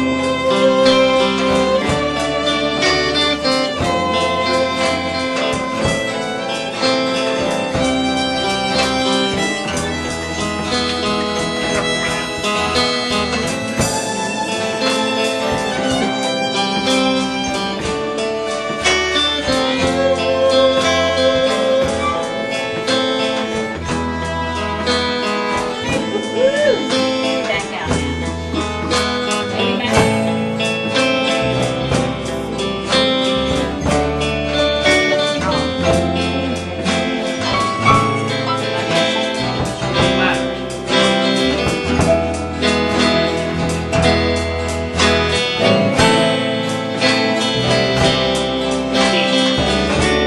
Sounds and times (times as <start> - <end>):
Violin, fiddle: 0.0 - 50.2
Speech: 25.8 - 30.7, 38.1 - 40.8, 49.0 - 50.2.